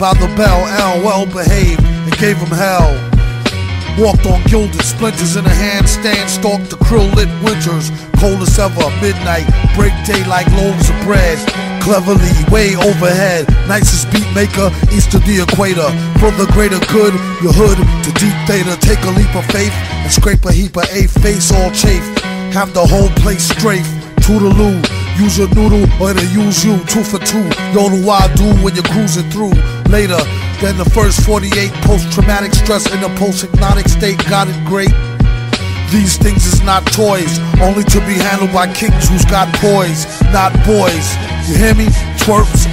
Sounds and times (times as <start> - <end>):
Music: 0.0 - 42.7.